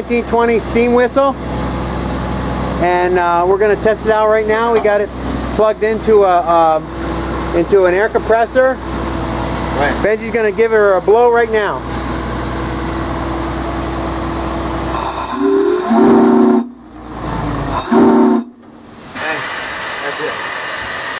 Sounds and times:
Hiss: 14.9 - 16.7, 17.6 - 21.1.

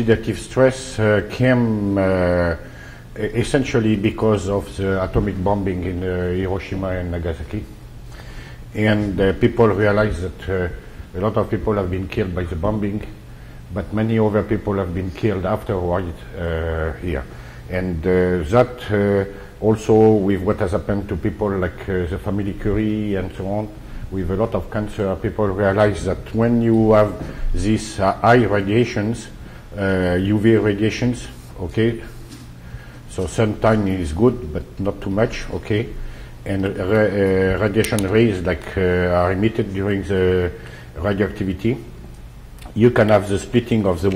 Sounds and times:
Speech: 0.0 - 7.8, 8.8 - 32.3, 33.1 - 41.9, 42.6 - 44.1.

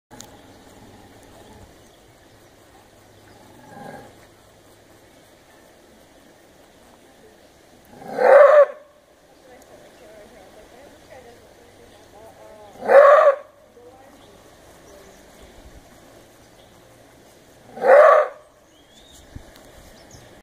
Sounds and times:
Speech: 7.0 - 7.6, 9.2 - 15.7.

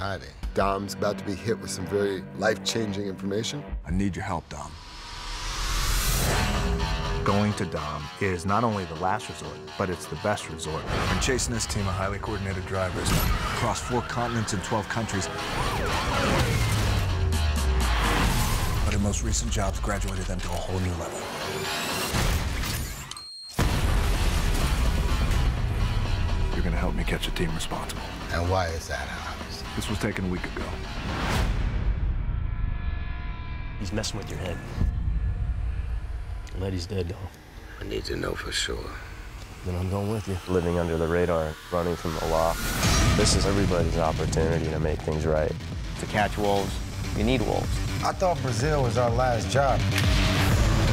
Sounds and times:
Speech: 0.0 - 4.8, 7.2 - 16.4, 33.8 - 34.6, 39.6 - 49.8
Music: 0.0 - 50.9.

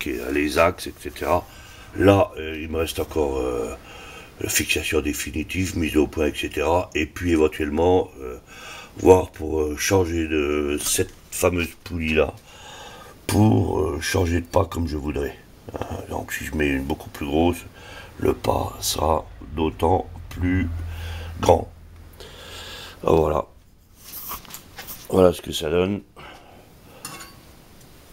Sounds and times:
Speech: 0.0 - 3.8, 4.4 - 8.4, 9.0 - 12.4, 13.3 - 20.8, 21.4 - 21.7, 23.0 - 23.6, 25.1 - 26.1.

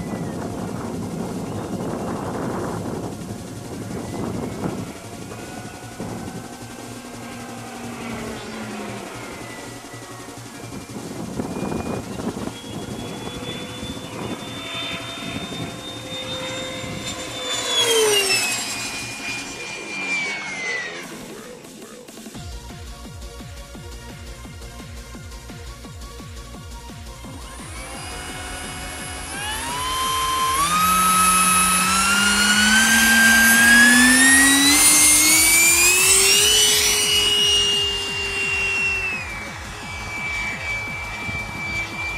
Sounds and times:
Fixed-wing aircraft, airplane: 0.0 - 42.1.

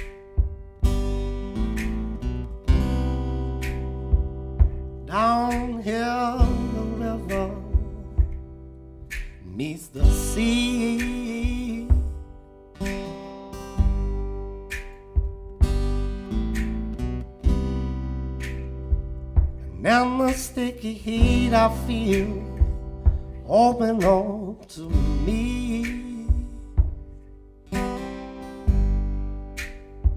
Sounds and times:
Music: 0.0 - 30.1.

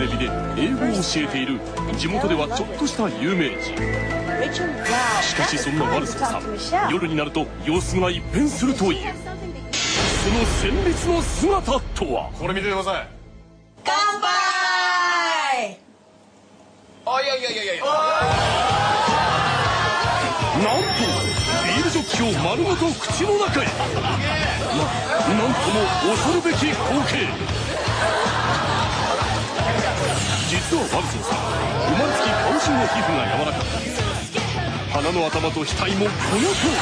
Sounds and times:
Music: 0.0 - 14.4, 18.2 - 36.8.

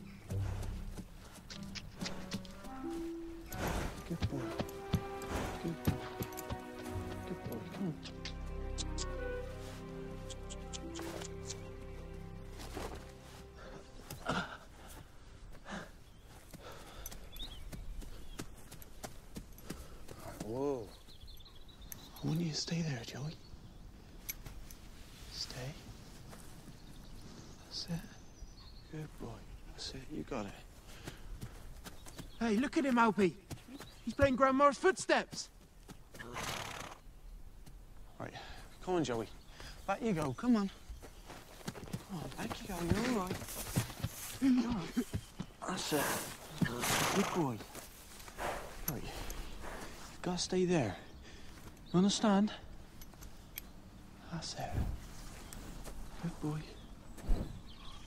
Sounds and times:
Clip-clop: 0.0 - 8.2, 16.4 - 21.8, 30.5 - 34.4, 41.0 - 45.6
Speech: 34.1 - 35.5, 42.1 - 43.4.

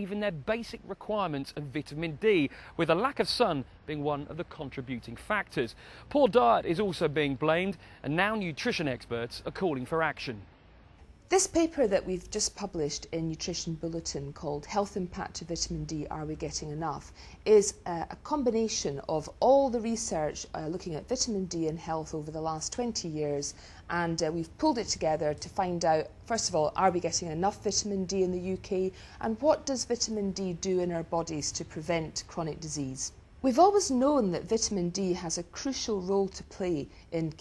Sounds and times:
Male speech, man speaking: 0.0 - 10.5.

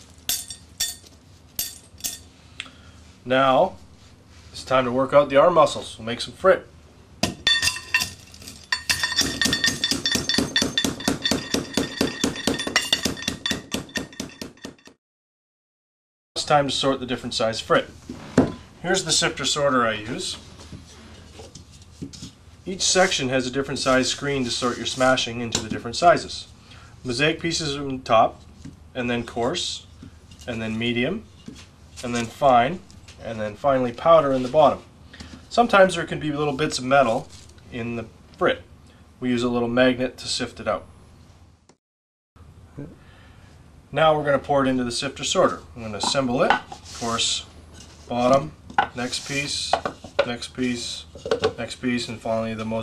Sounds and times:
Speech: 3.2 - 3.8, 4.5 - 6.7, 16.4 - 18.0, 18.8 - 20.4, 22.7 - 26.5, 27.1 - 28.4, 29.0 - 29.9, 30.5 - 31.3, 32.0 - 34.9, 35.5 - 40.9, 43.9 - 47.5, 48.1 - 52.8.

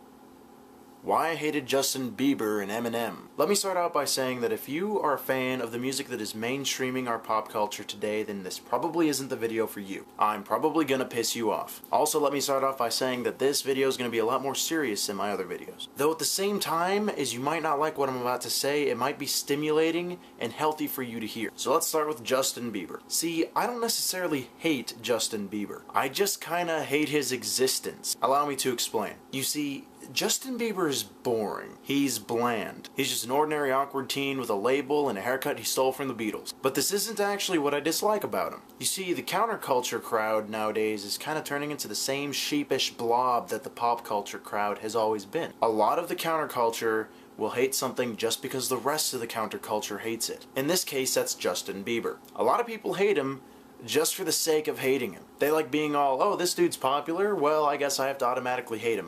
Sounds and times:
Speech: 1.1 - 59.0.

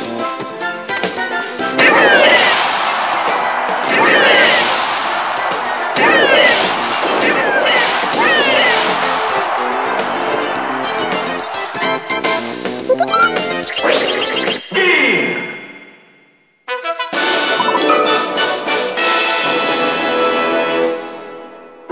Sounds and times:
Music: 0.0 - 14.7, 16.7 - 21.9.

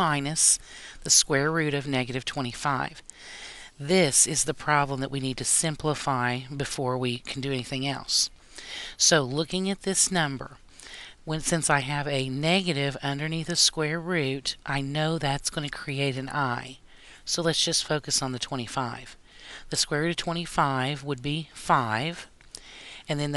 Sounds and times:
Speech: 0.0 - 3.0, 3.8 - 8.3, 9.0 - 10.6, 11.3 - 22.3, 23.1 - 23.3.

